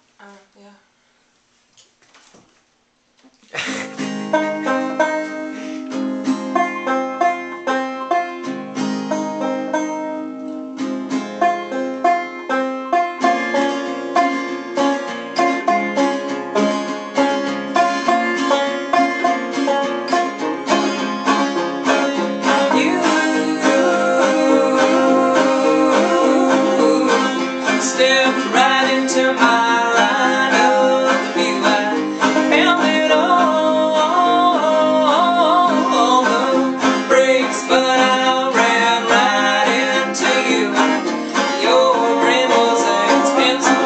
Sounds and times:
Music: 3.7 - 43.8.

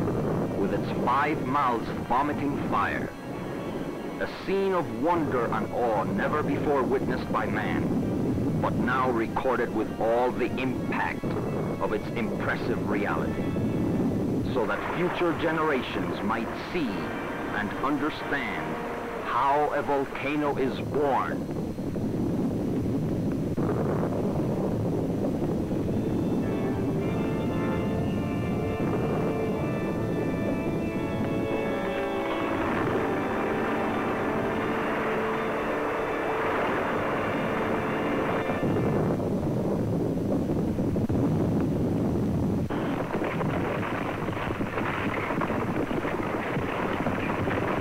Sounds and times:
Music: 0.0 - 47.8
Outside, rural or natural: 0.0 - 47.8.

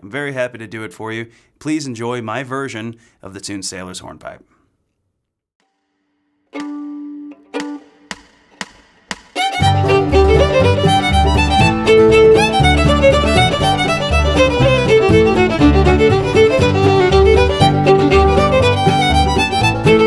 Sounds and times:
Pizzicato: 6.6 - 8.8, 9.4 - 20.0.

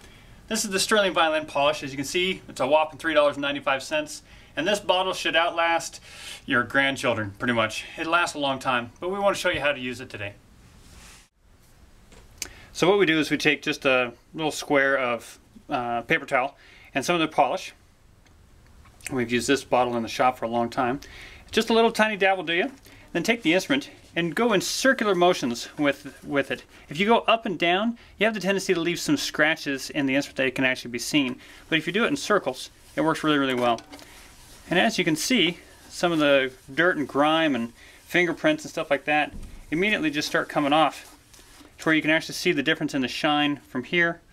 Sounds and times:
Speech: 0.5 - 10.4, 12.8 - 17.8, 19.0 - 34.0, 34.7 - 41.2, 41.8 - 44.3.

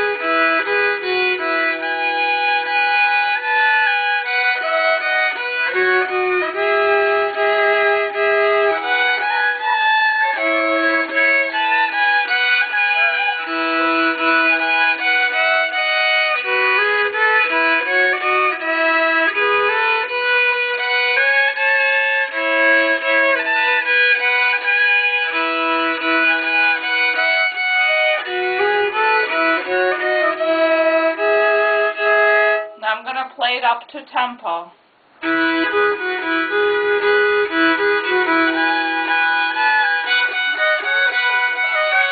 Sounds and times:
Violin, fiddle: 0.0 - 33.0, 35.2 - 42.1.

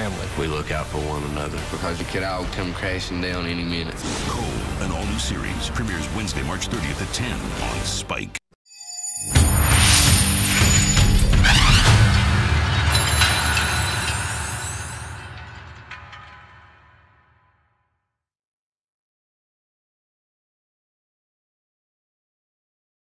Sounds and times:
Speech: 0.0 - 8.4
Music: 0.0 - 14.4.

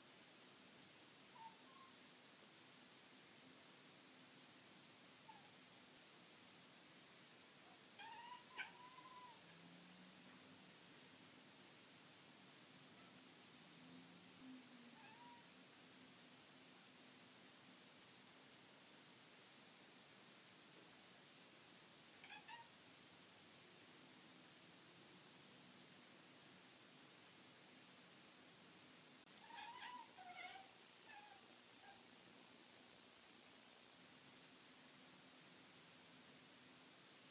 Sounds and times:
Cat: 1.3 - 2.0, 5.2 - 5.6, 7.7 - 9.6, 14.5 - 15.6, 22.1 - 22.8, 29.4 - 32.1.

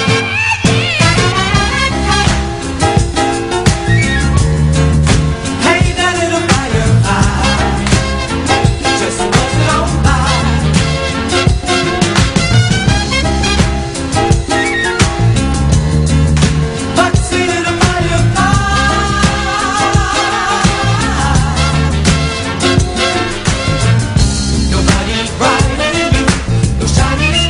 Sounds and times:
Music: 0.0 - 27.4.

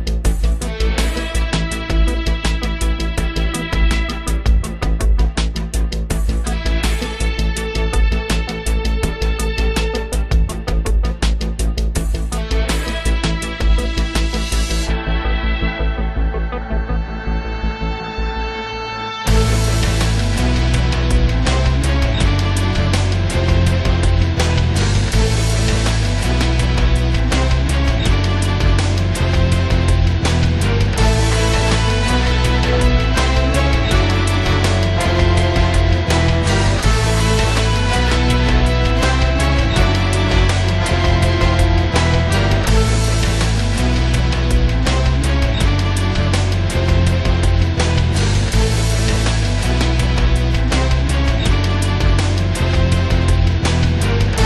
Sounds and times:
Music: 0.0 - 54.4.

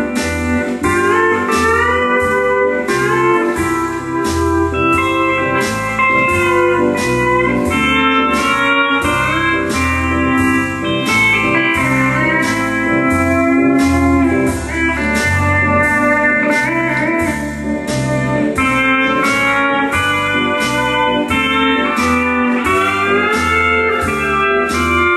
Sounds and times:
Strum: 0.0 - 25.1.

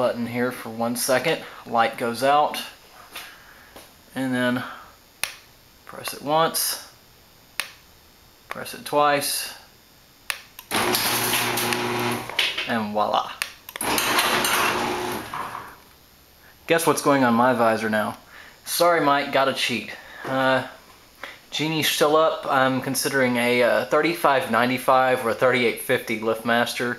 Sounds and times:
Speech: 0.0 - 2.8, 4.2 - 4.8, 5.9 - 7.0, 8.5 - 9.7, 12.6 - 13.4, 16.7 - 20.8, 21.5 - 26.9.

